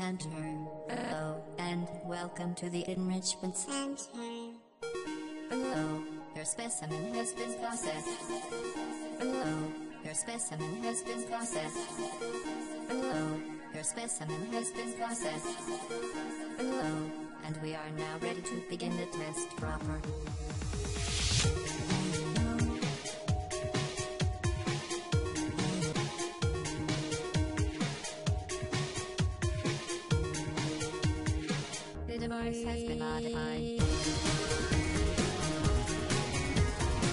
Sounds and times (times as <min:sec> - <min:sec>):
Speech: 0:00.0 - 0:04.6, 0:05.6 - 0:08.3, 0:09.3 - 0:11.9, 0:13.0 - 0:15.4, 0:16.8 - 0:20.2, 0:32.1 - 0:33.8
Music: 0:00.0 - 0:37.1.